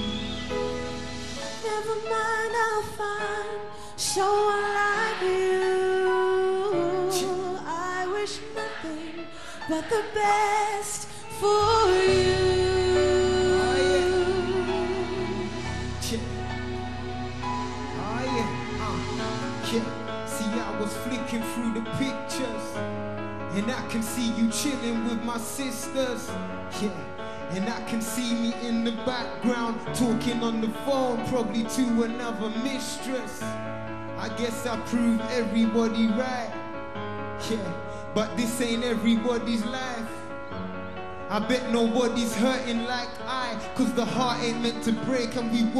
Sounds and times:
Music: 0.0 - 45.8.

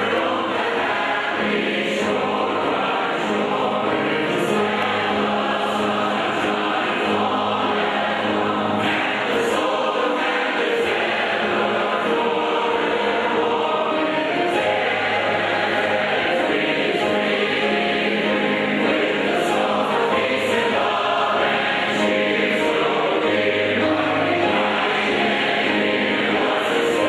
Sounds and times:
Choir: 0.0 - 27.0.

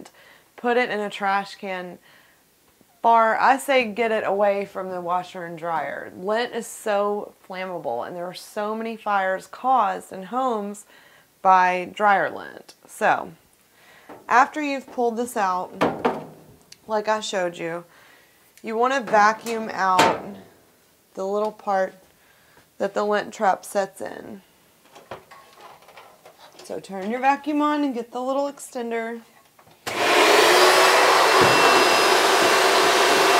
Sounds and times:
Speech: 0.6 - 2.0, 3.0 - 10.8, 11.5 - 13.4, 14.3 - 15.8, 16.8 - 17.9, 18.6 - 20.4, 21.2 - 22.0, 22.8 - 24.4, 26.6 - 29.3.

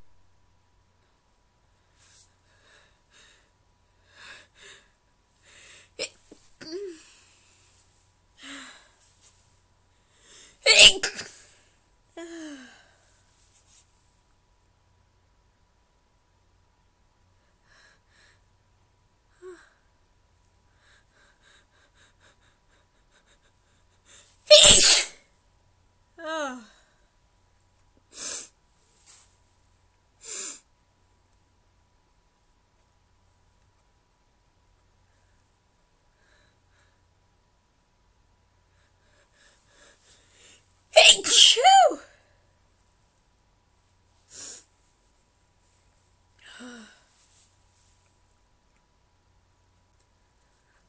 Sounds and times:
Sneeze: 10.7 - 11.5, 24.5 - 25.3, 41.0 - 42.1.

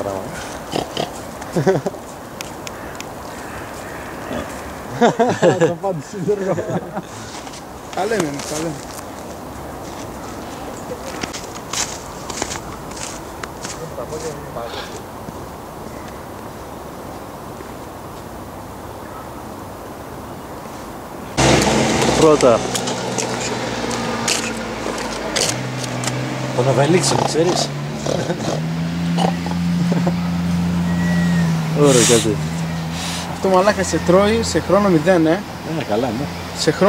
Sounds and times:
Oink: 0.4 - 1.2, 4.2 - 4.6, 27.0 - 28.6, 29.2 - 29.6.

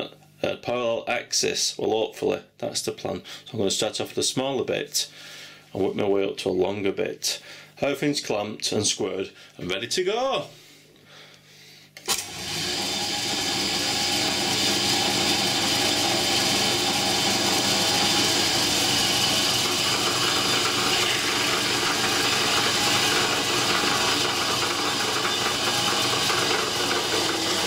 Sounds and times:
Speech: 0.0 - 5.1, 5.7 - 10.6.

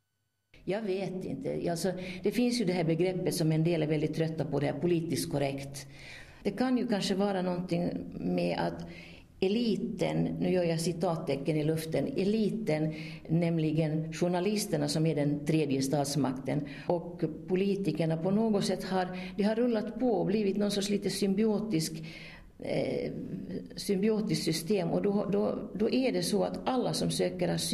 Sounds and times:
Speech: 0.6 - 5.9, 6.5 - 22.0, 22.6 - 27.7.

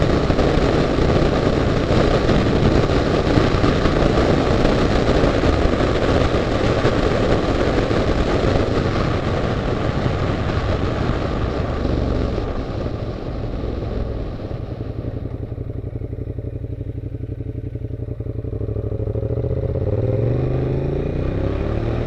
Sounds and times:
Motorcycle: 0.0 - 22.0.

